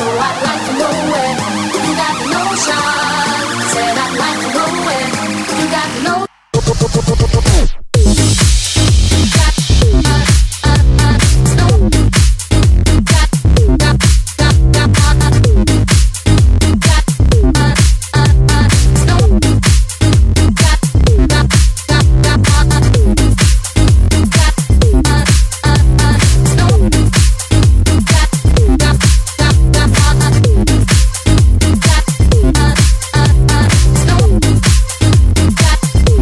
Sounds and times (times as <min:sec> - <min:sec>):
Disco: 0:00.0 - 0:36.2.